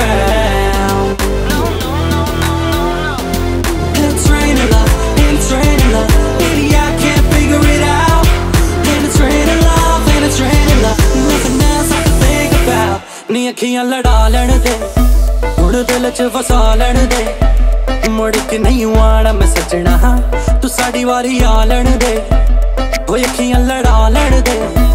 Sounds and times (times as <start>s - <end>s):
Exciting music: 0.0s - 24.9s.